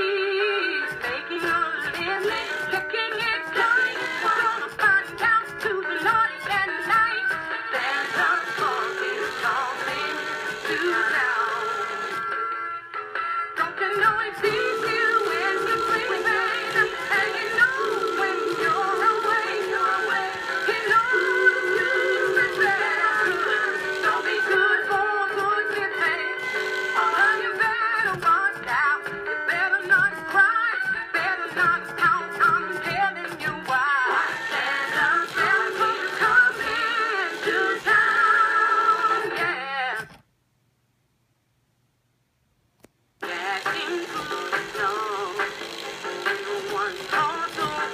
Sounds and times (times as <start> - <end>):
Music: 0.0 - 40.2, 43.2 - 47.9.